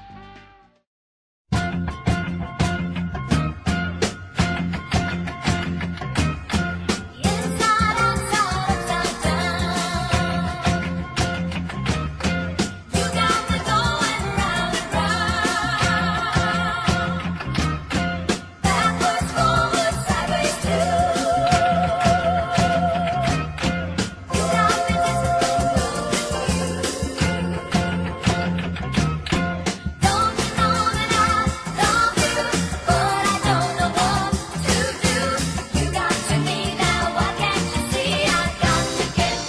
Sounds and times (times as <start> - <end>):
Music: 0.0 - 0.9, 1.5 - 39.4.